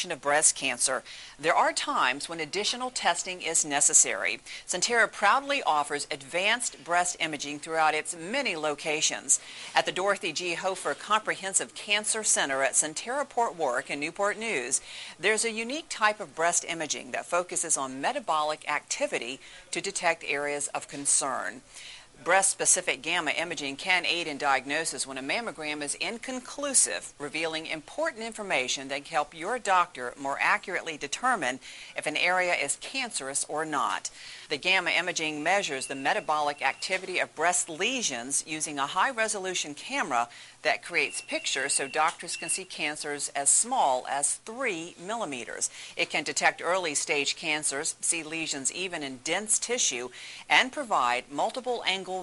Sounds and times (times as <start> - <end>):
Speech: 0.0 - 21.6, 22.2 - 52.2.